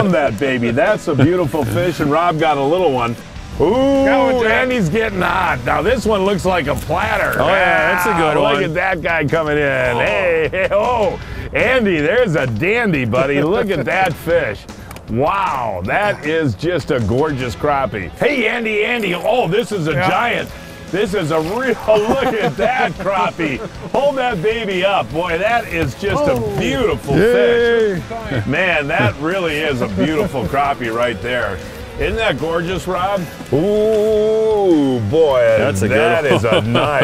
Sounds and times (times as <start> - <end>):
Speech: 0.0 - 14.6, 15.2 - 37.0
Music: 0.0 - 37.0.